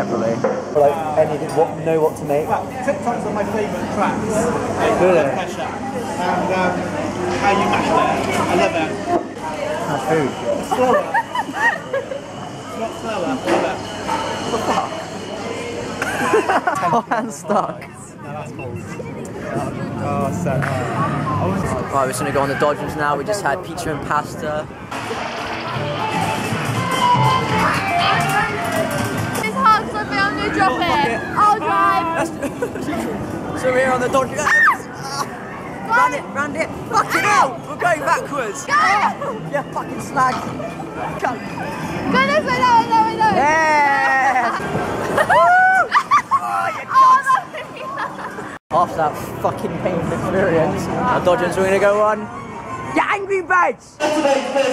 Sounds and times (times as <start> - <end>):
Inside, public space: 0.0 - 54.7.